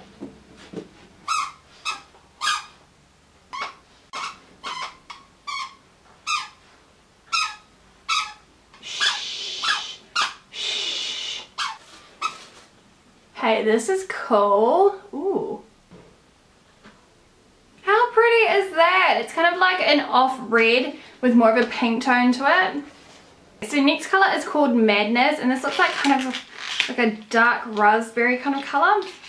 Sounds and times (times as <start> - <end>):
Inside, small room: 0.0 - 29.2
Speech: 13.4 - 15.7, 17.8 - 22.9, 23.6 - 29.2.